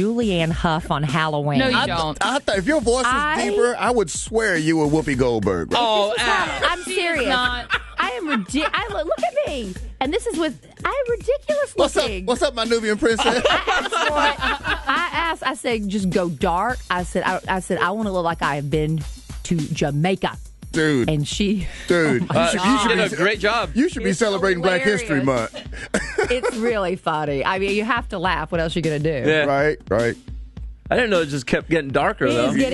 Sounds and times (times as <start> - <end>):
Speech: 0.0 - 30.2, 30.9 - 32.7
Music: 0.0 - 32.7.